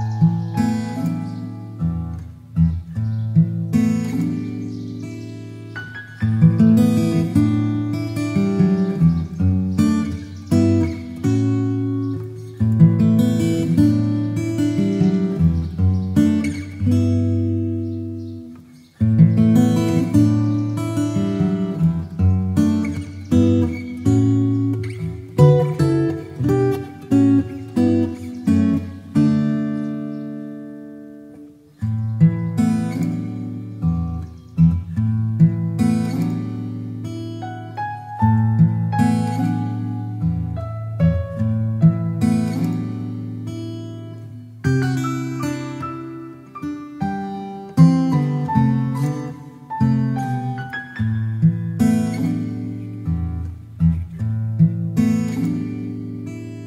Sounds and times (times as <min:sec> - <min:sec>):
Music: 0:00.0 - 0:56.6.